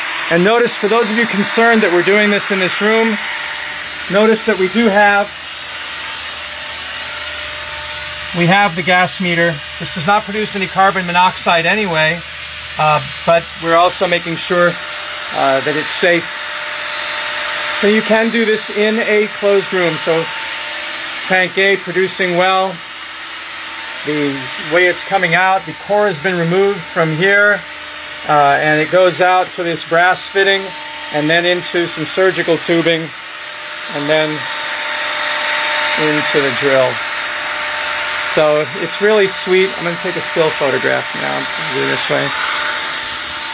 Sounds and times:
Drill: 0.0s - 43.5s.

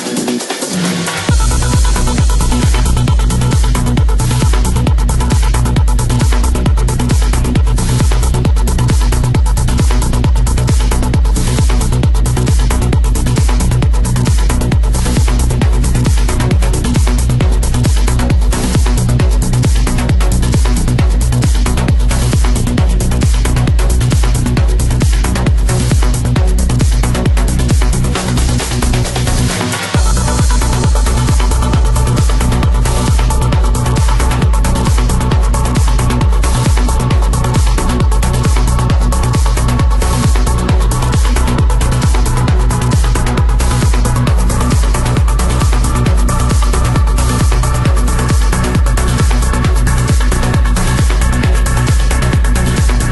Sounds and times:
Music: 0.0s - 53.1s.

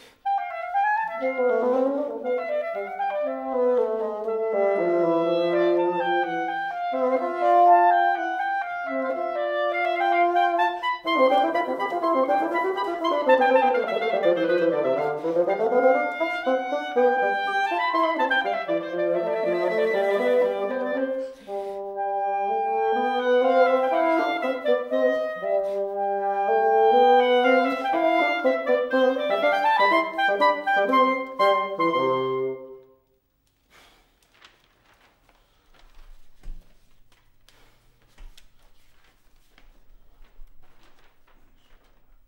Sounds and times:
Clarinet: 0.0s - 33.2s.

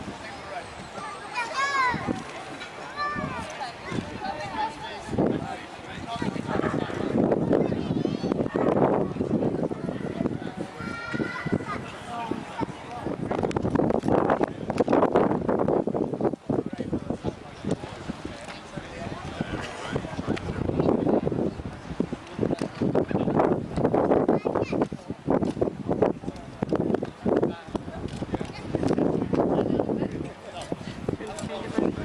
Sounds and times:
Outside, rural or natural: 0.0s - 32.0s
Speech: 16.6s - 23.4s, 26.0s - 32.0s.

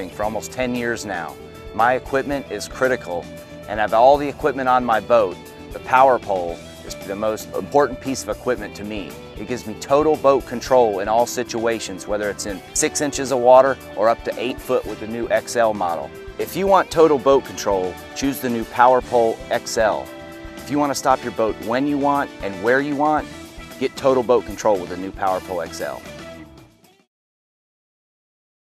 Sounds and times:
Speech: 0.0s - 20.1s, 20.7s - 23.2s, 23.8s - 26.0s
Music: 0.0s - 27.1s.

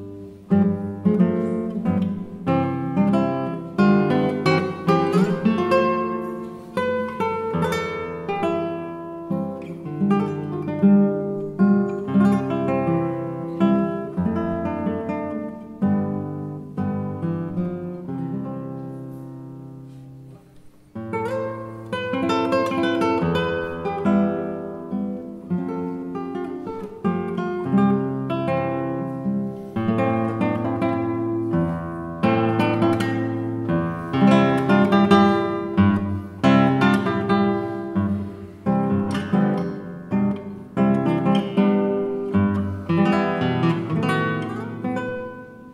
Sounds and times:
Acoustic guitar: 0.0s - 45.7s.

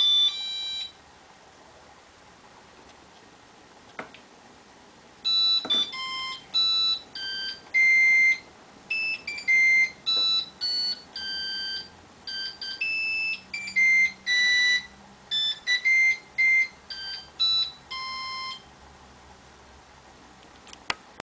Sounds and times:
Inside, small room: 0.0s - 21.2s.

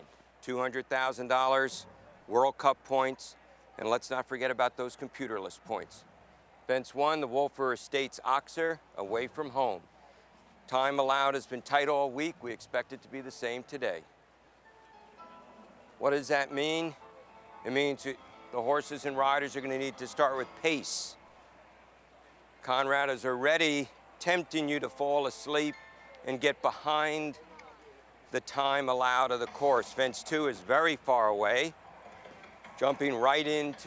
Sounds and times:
Speech: 0.0s - 6.0s, 6.7s - 9.8s, 10.7s - 14.0s, 16.0s - 17.0s, 17.7s - 21.2s, 22.6s - 31.7s, 32.8s - 33.8s.

